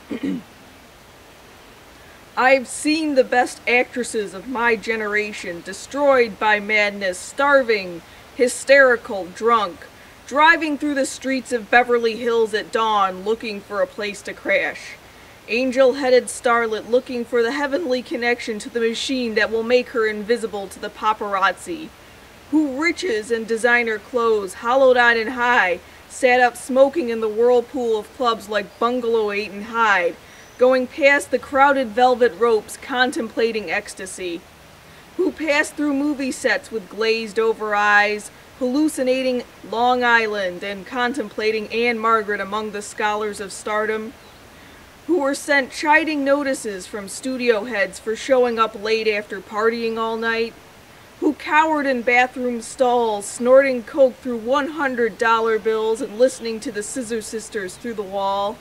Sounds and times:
Speech: 0:02.4 - 0:34.4, 0:35.2 - 0:44.1, 0:45.1 - 0:50.6, 0:51.2 - 0:58.6.

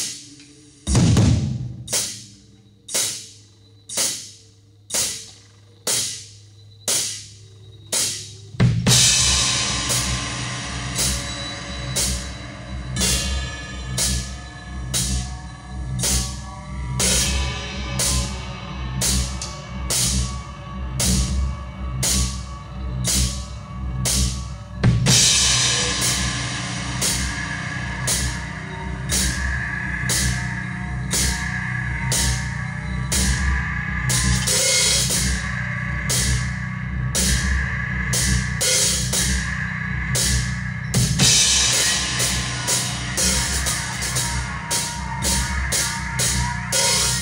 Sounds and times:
Hi-hat: 0:01.8 - 0:47.2.

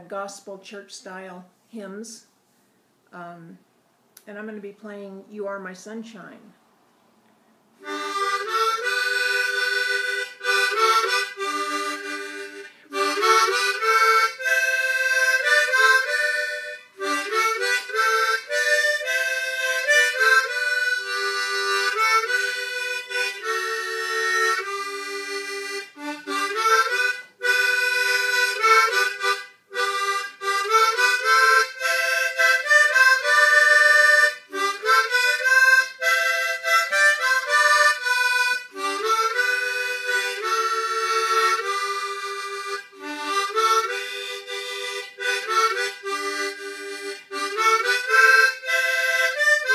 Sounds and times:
Music: 0:07.8 - 0:49.7.

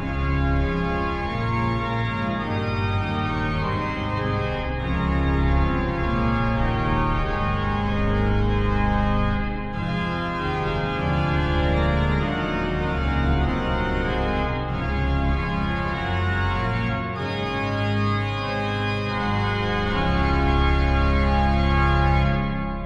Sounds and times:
Piano: 0:00.0 - 0:22.8.

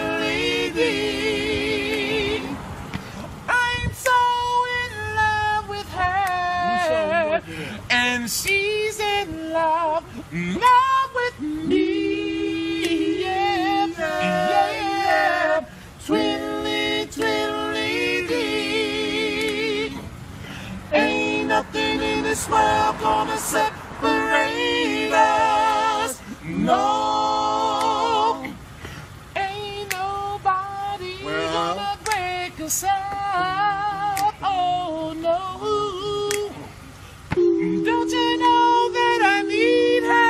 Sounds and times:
Choir: 0:00.0 - 0:02.9, 0:03.5 - 0:20.2, 0:20.8 - 0:28.7, 0:29.3 - 0:40.2
Male singing: 0:03.5 - 0:19.9, 0:29.4 - 0:36.7.

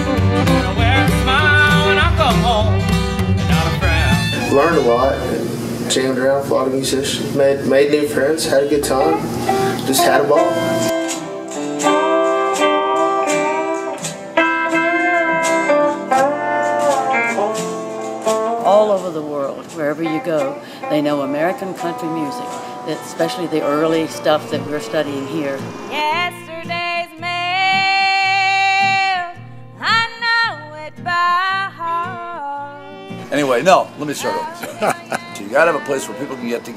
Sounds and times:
Country: 0:00.0 - 0:06.8, 0:07.4 - 0:36.7.

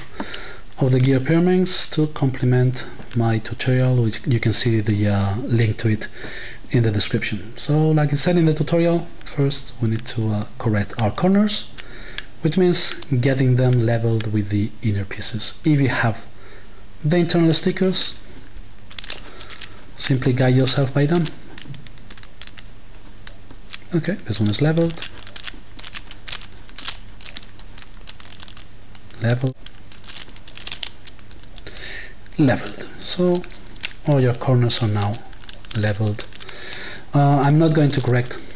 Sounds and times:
Speech: 0:00.8 - 0:06.1, 0:06.7 - 0:11.7, 0:12.4 - 0:16.3, 0:17.0 - 0:18.2, 0:20.0 - 0:21.4, 0:23.9 - 0:25.1, 0:29.2 - 0:29.6, 0:32.4 - 0:36.3, 0:37.1 - 0:38.5.

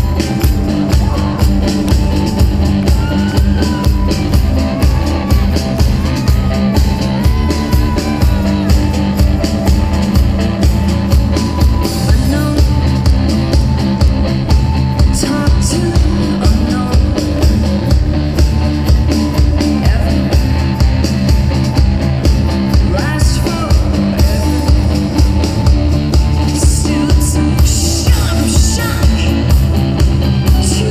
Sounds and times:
Music: 0:00.0 - 0:30.9.

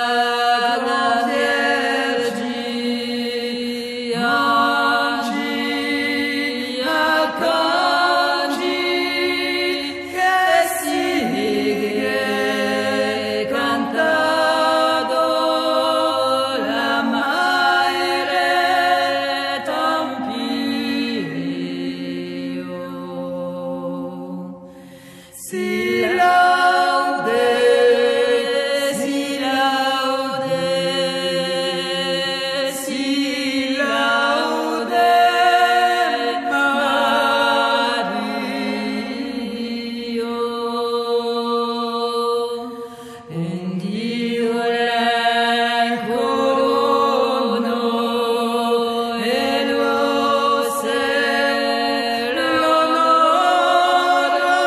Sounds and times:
Mantra: 0:00.0 - 0:54.6.

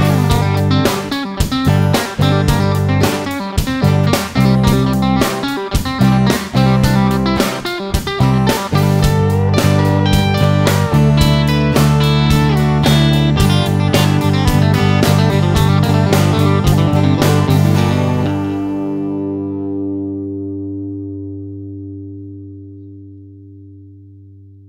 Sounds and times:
Country: 0:00.0 - 0:20.6
Electric guitar: 0:00.0 - 0:24.6.

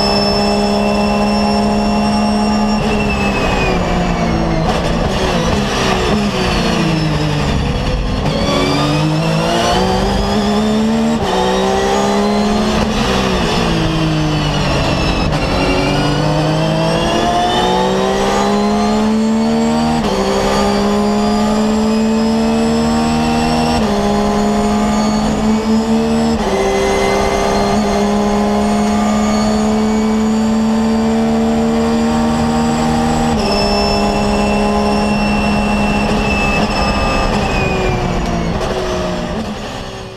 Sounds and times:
Race car, auto racing: 0:00.0 - 0:40.1.

